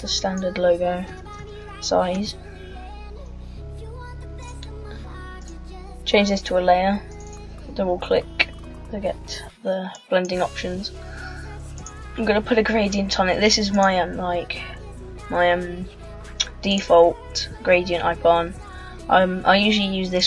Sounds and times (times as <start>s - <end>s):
Speech: 0.0s - 1.2s, 1.8s - 2.4s, 6.1s - 7.1s, 7.7s - 10.9s, 12.2s - 20.2s
Music: 0.0s - 20.2s.